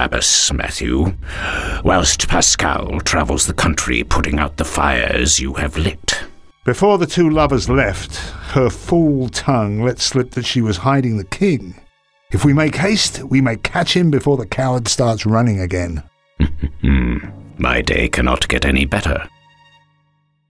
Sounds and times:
Speech: 0:00.0 - 0:16.1, 0:16.8 - 0:19.3
Music: 0:00.0 - 0:20.5.

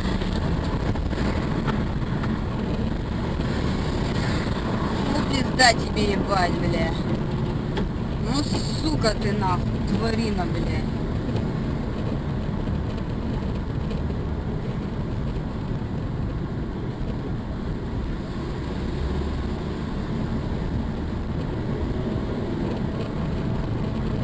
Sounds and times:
Speech: 0:05.1 - 0:07.0, 0:08.2 - 0:10.9.

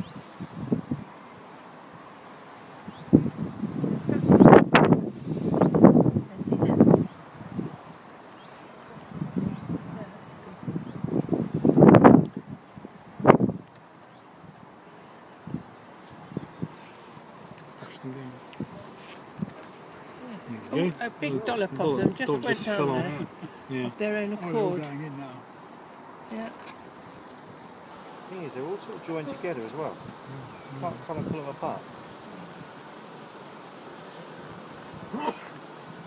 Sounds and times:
Bee, wasp, etc.: 0:00.0 - 0:36.0
Fly, housefly: 0:00.0 - 0:36.0.

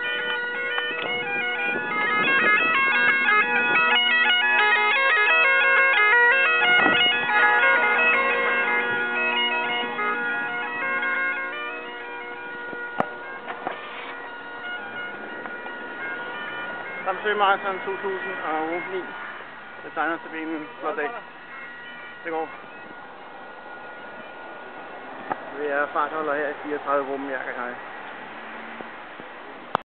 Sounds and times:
Outside, rural or natural: 0:00.0 - 0:29.8
Speech: 0:19.9 - 0:21.2, 0:25.5 - 0:27.8.

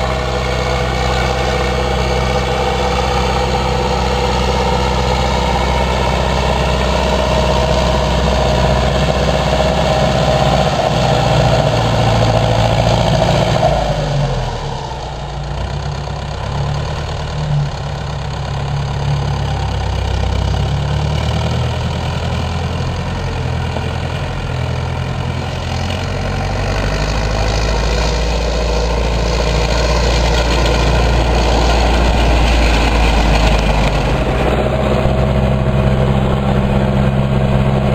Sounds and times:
Accelerating, revving, vroom: 0:00.0 - 0:15.0, 0:18.7 - 0:37.9
Heavy engine (low frequency): 0:00.0 - 0:37.9
Vehicle: 0:00.0 - 0:37.9.

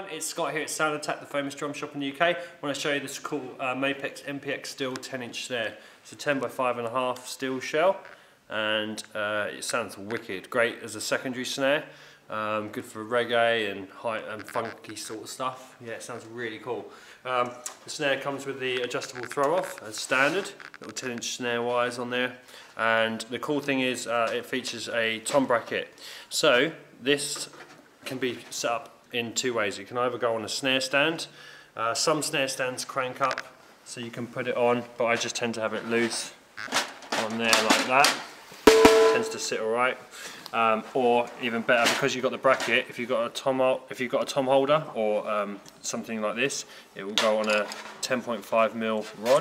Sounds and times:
Speech: 0:00.0 - 0:36.4, 0:37.2 - 0:38.3, 0:39.1 - 0:49.4.

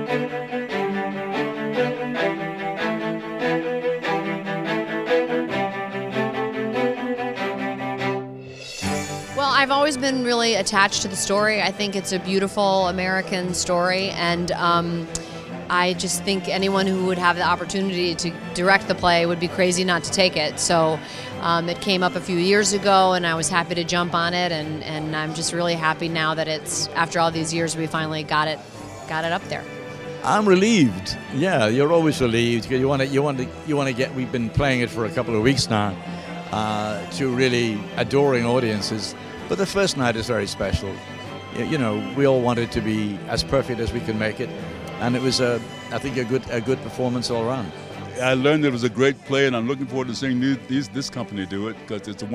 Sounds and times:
Music: 0:00.0 - 0:52.3.

